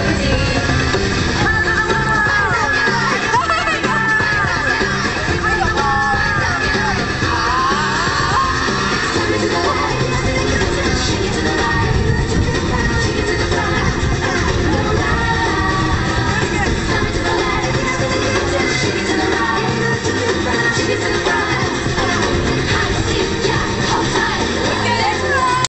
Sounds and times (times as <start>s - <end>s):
Music: 0.0s - 25.6s
Speech: 16.3s - 16.8s.